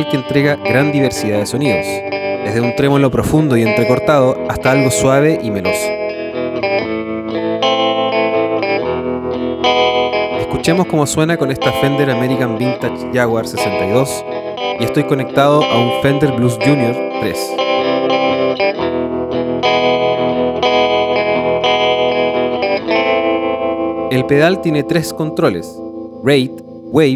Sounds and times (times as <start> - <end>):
Speech: 0.0 - 5.9, 10.4 - 14.2, 14.8 - 17.6, 24.1 - 27.1
Distortion: 0.0 - 27.1
Music: 0.0 - 27.1.